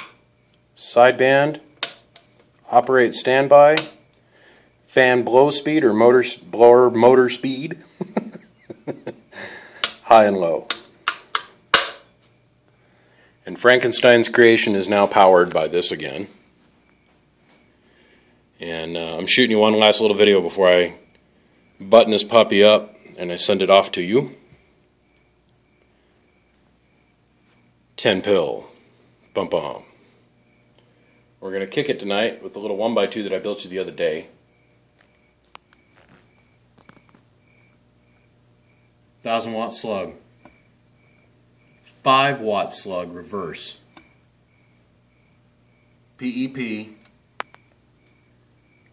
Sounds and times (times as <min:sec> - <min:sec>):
Speech: 0:00.8 - 0:01.7, 0:02.7 - 0:04.0, 0:04.9 - 0:07.8, 0:10.0 - 0:10.7, 0:13.4 - 0:16.4, 0:18.6 - 0:21.0, 0:21.8 - 0:24.4, 0:28.0 - 0:29.9, 0:31.4 - 0:34.4, 0:39.2 - 0:40.2, 0:42.0 - 0:43.9, 0:46.2 - 0:47.1.